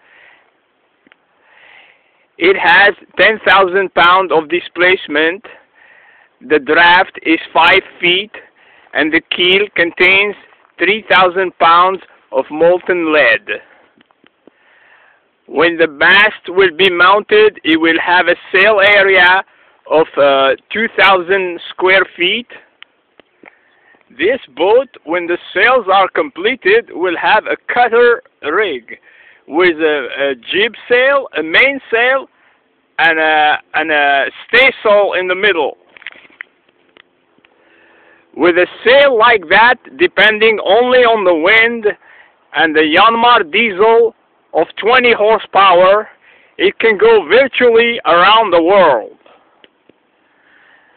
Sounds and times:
Speech: 2.4 - 5.6, 6.4 - 13.7, 15.5 - 22.7, 24.2 - 32.3, 33.0 - 35.8, 38.4 - 49.3.

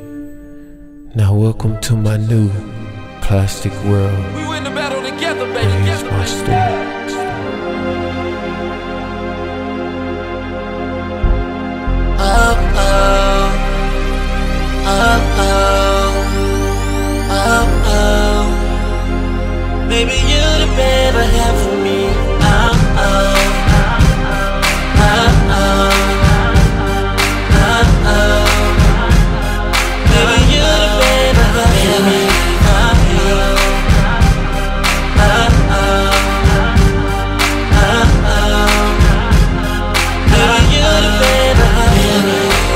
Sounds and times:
Music: 0.0 - 42.7.

